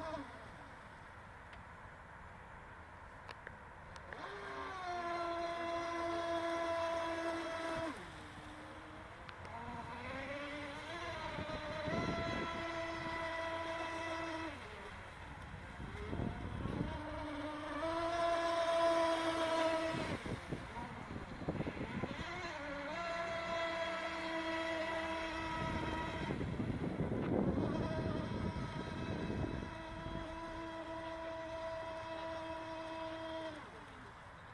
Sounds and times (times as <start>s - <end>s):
Motorboat, speedboat: 0.0s - 34.5s.